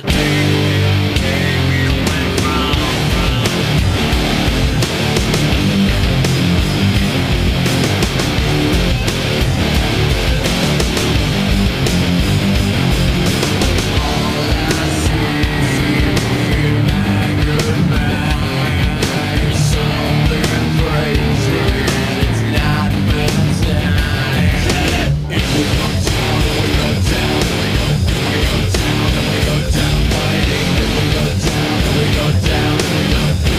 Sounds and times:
Music: 0.0 - 33.5.

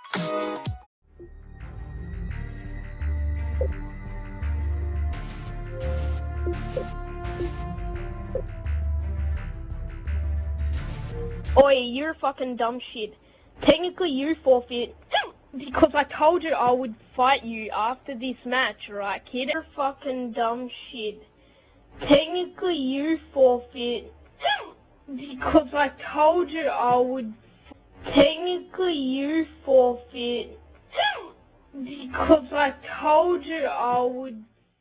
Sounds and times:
Speech: 11.6 - 21.2, 22.0 - 27.4, 28.0 - 34.5.

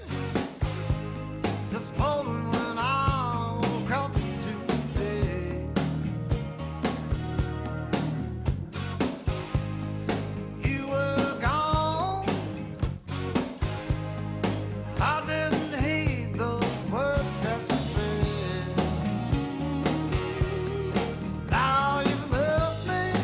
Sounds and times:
Music: 0.0 - 23.2.

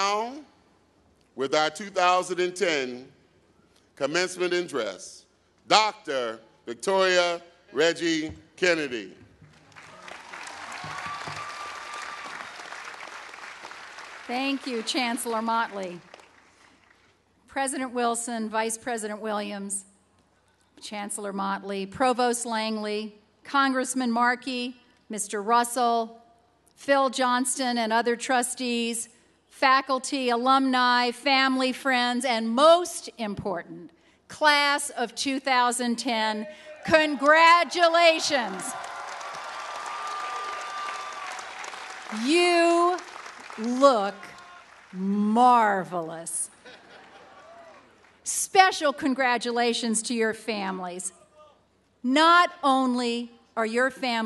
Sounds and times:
Narration, monologue: 0.0 - 9.6, 14.2 - 38.8, 42.1 - 47.0, 48.2 - 54.2
Female speech, woman speaking: 14.3 - 16.0, 17.5 - 19.8, 20.8 - 26.1, 26.8 - 38.7, 42.1 - 43.0, 43.6 - 44.3, 45.0 - 46.5, 48.3 - 51.1, 52.1 - 54.2.

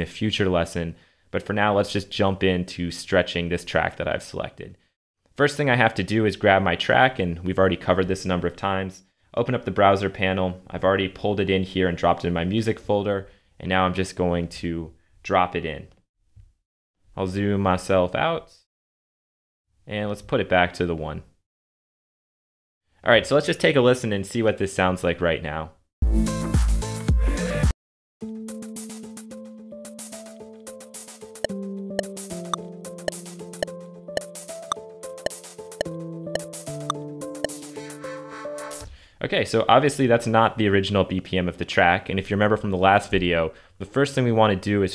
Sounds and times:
Speech: 0.0 - 4.8, 5.4 - 16.0, 17.2 - 18.7, 19.9 - 21.3, 23.0 - 25.8, 39.2 - 44.9.

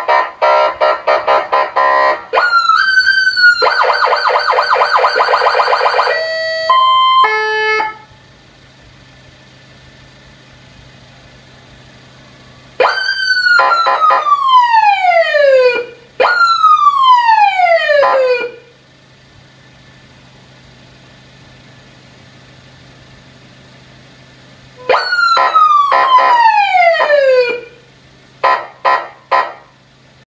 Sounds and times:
Police car (siren): 0.0 - 8.1, 12.4 - 18.7, 24.8 - 27.8.

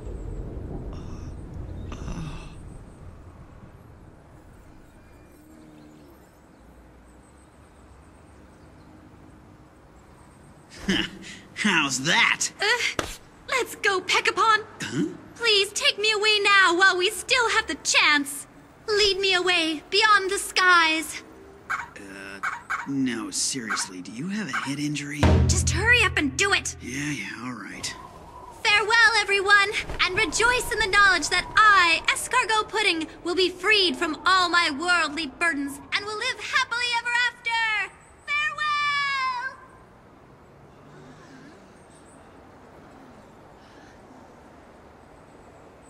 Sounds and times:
Outside, rural or natural: 0.0 - 45.8
Speech: 22.0 - 28.0, 28.6 - 39.6.

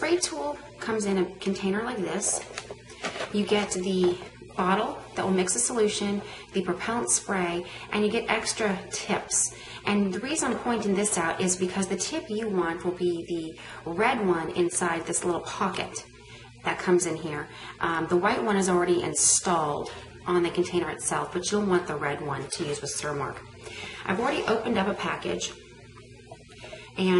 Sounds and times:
Speech: 0.0 - 2.5, 3.3 - 23.4, 24.0 - 25.6, 27.0 - 27.1.

